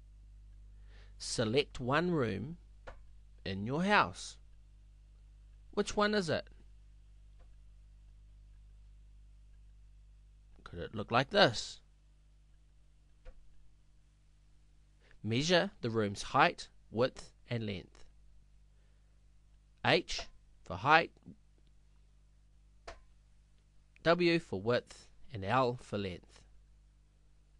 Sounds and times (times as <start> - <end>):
Speech: 1.2 - 2.6, 3.4 - 4.4, 5.7 - 6.5, 10.6 - 11.9, 15.2 - 18.1, 19.8 - 21.4, 24.0 - 26.5.